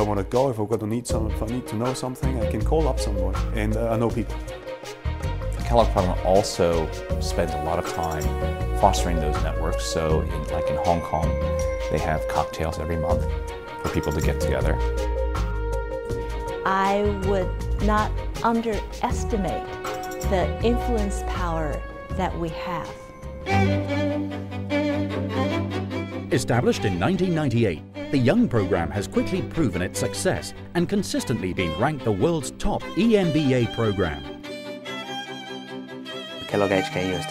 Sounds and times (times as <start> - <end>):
Cello: 1.1 - 15.6, 16.2 - 37.3.